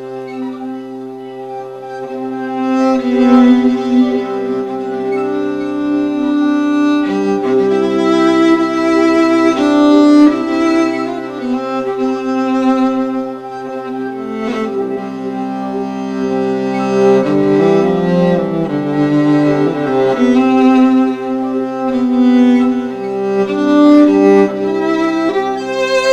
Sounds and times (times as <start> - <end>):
Classical music: 0.0 - 26.1
Violin, fiddle: 0.0 - 26.1.